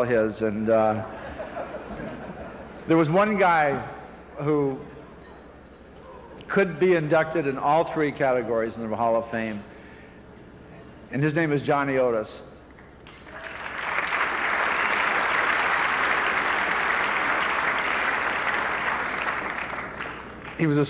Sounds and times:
Male speech, man speaking: 0:00.0 - 0:01.1, 0:02.9 - 0:04.8, 0:06.5 - 0:09.7, 0:11.1 - 0:12.5, 0:20.6 - 0:20.8
Narration, monologue: 0:00.0 - 0:13.0, 0:20.5 - 0:20.8.

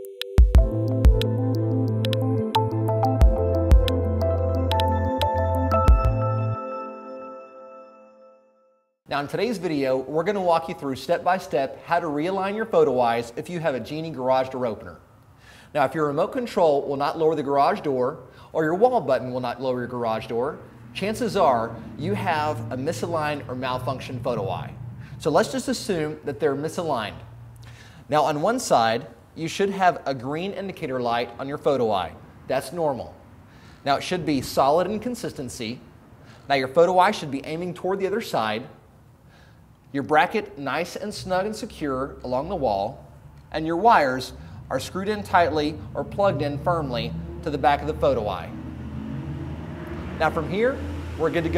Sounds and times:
Speech: 0:09.1 - 0:15.0, 0:15.7 - 0:27.2, 0:28.1 - 0:33.2, 0:33.8 - 0:35.8, 0:36.5 - 0:38.8, 0:40.0 - 0:48.5, 0:50.2 - 0:51.5.

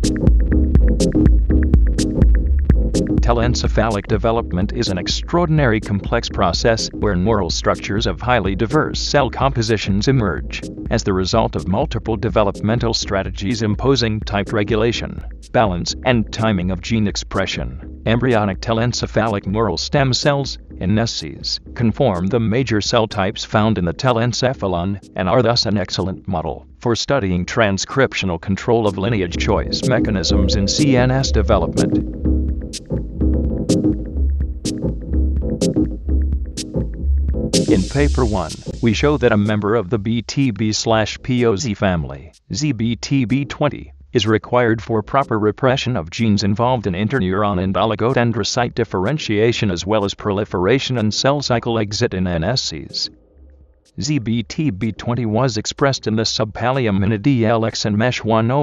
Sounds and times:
Music: 0:00.0 - 0:50.2, 0:52.1 - 0:56.1
Speech: 0:03.2 - 0:32.0, 0:37.7 - 0:53.2, 0:54.0 - 0:58.6.

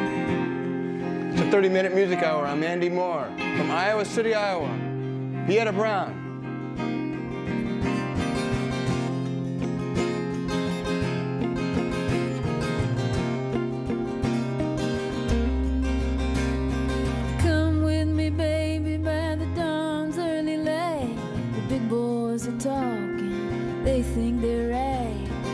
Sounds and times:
Music: 0:00.0 - 0:25.5.

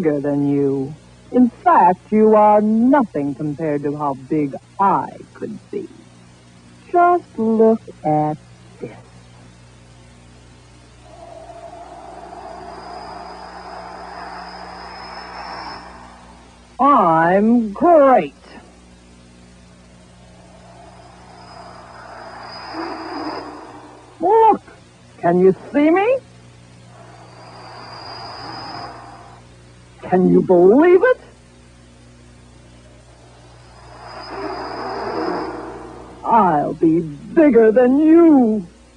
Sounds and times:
Speech: 0:00.0 - 0:06.0, 0:06.9 - 0:09.0, 0:16.8 - 0:18.6, 0:24.2 - 0:26.3, 0:30.0 - 0:31.3, 0:36.3 - 0:38.7.

